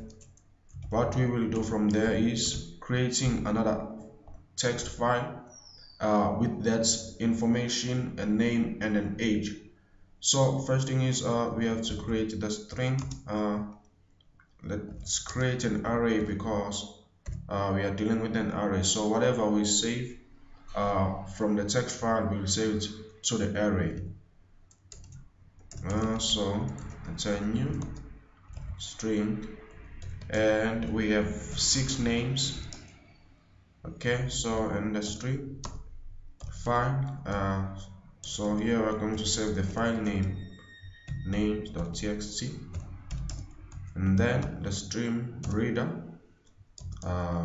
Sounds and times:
Speech: 0:00.8 - 0:09.6, 0:10.2 - 0:13.7, 0:14.6 - 0:16.9, 0:17.5 - 0:24.1, 0:25.8 - 0:28.1, 0:28.8 - 0:32.8, 0:33.9 - 0:35.6, 0:36.5 - 0:40.6, 0:41.2 - 0:42.9, 0:43.9 - 0:46.1, 0:47.0 - 0:47.4.

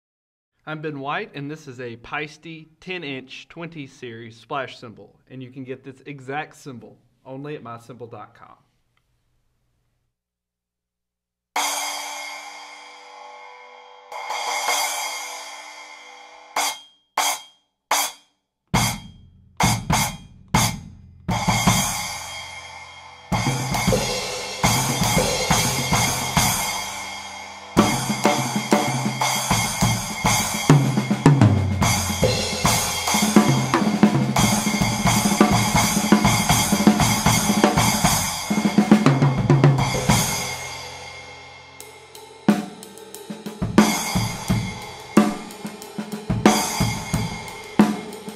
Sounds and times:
Bass drum: 0:18.8 - 0:22.1, 0:23.4 - 0:41.1, 0:43.6 - 0:45.5, 0:46.3 - 0:47.5.

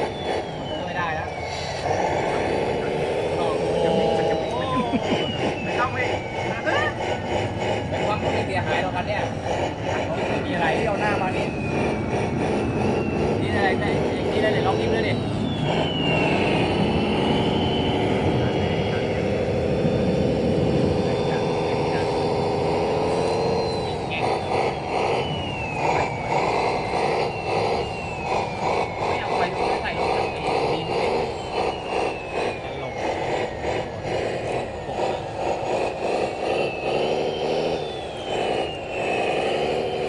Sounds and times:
Truck: 0:00.0 - 0:40.0
Speech: 0:07.9 - 0:09.3, 0:13.4 - 0:15.2, 0:29.2 - 0:31.0.

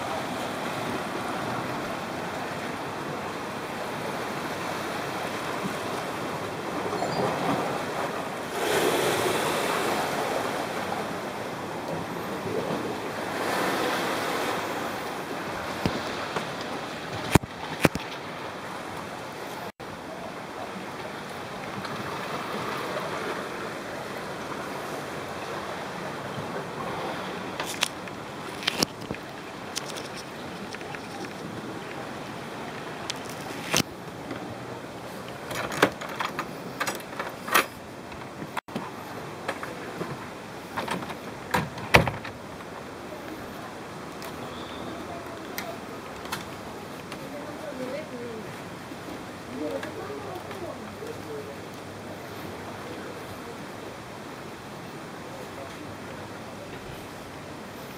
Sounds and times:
Outside, rural or natural: 0:00.0 - 0:57.9.

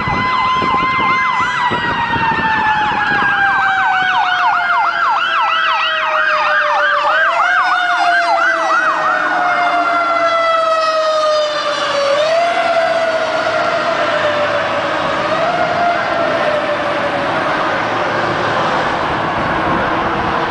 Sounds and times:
Vehicle: 0:00.0 - 0:20.5.

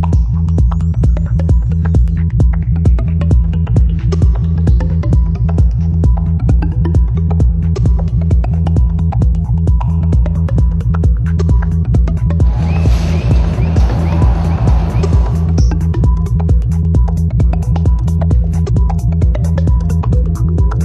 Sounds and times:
Techno: 0:00.0 - 0:20.8.

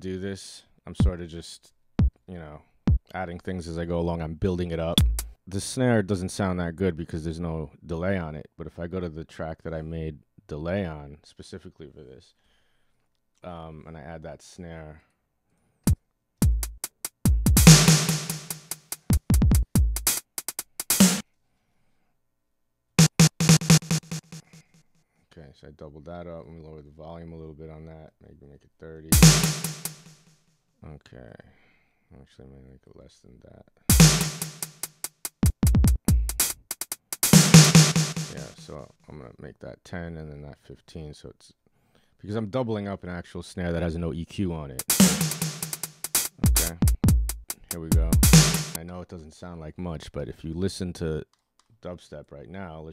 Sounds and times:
Speech: 0:00.0 - 0:01.7, 0:02.3 - 0:12.4, 0:13.4 - 0:15.1, 0:25.3 - 0:29.2, 0:30.8 - 0:33.8, 0:38.3 - 0:41.6, 0:42.2 - 0:44.8, 0:46.4 - 0:46.9, 0:47.7 - 0:52.9
Drum machine: 0:02.0 - 0:02.2, 0:05.0 - 0:05.4, 0:16.4 - 0:21.2, 0:23.0 - 0:24.6, 0:29.2 - 0:30.2, 0:33.9 - 0:38.7, 0:44.8 - 0:48.8
Dubstep: 0:17.6 - 0:18.8, 0:29.2 - 0:30.1, 0:33.9 - 0:34.9, 0:37.2 - 0:38.7, 0:44.8 - 0:48.8.

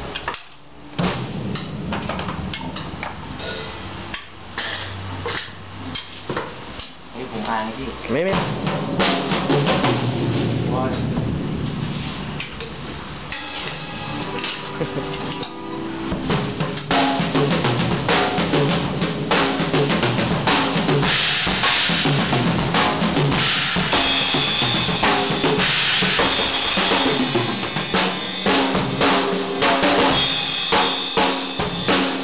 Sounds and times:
Music: 0:00.0 - 0:04.2, 0:08.3 - 0:12.5, 0:13.2 - 0:32.2
Speech: 0:07.1 - 0:08.5, 0:10.7 - 0:11.2.

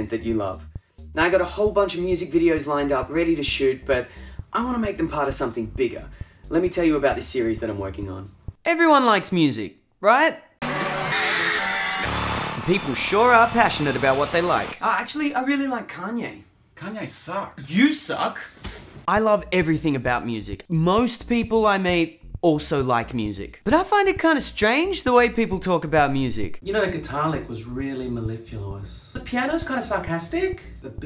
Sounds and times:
Speech: 0:00.0 - 0:00.6, 0:01.2 - 0:10.4, 0:12.7 - 0:31.0
Music: 0:00.0 - 0:09.0, 0:10.6 - 0:14.8, 0:19.1 - 0:31.0.

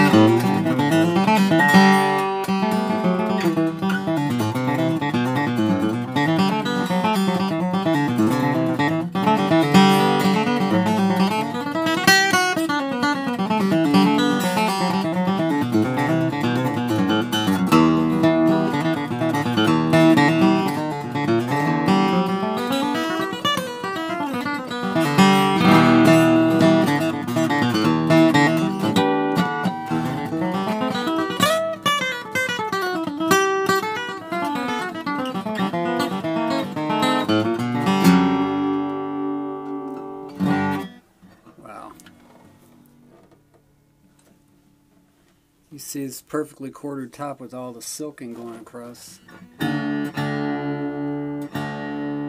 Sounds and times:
Plucked string instrument: 0:00.0 - 0:43.4.

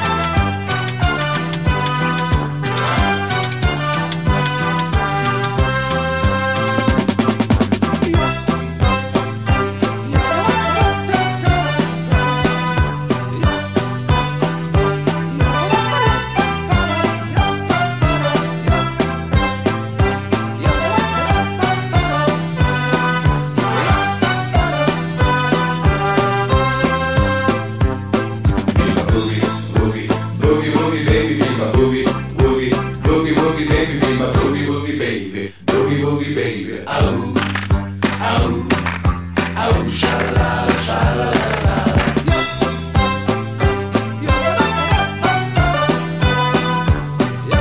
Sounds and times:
Music: 0:00.0 - 0:47.6.

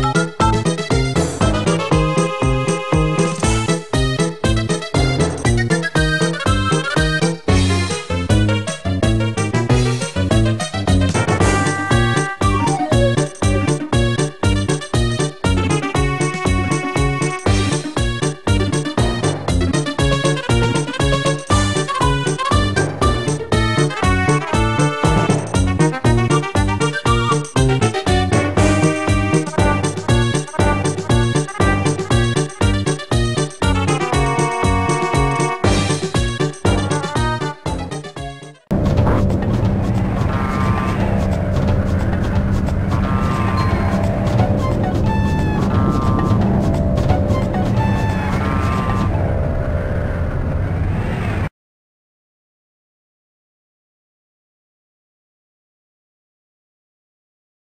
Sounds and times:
Music: 0:00.0 - 0:49.7.

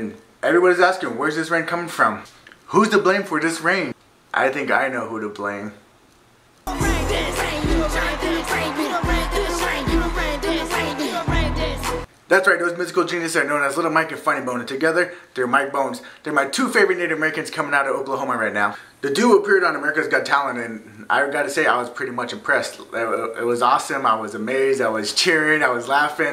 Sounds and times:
Speech: 0:00.0 - 0:05.8, 0:12.3 - 0:26.3
Music: 0:06.7 - 0:12.1.

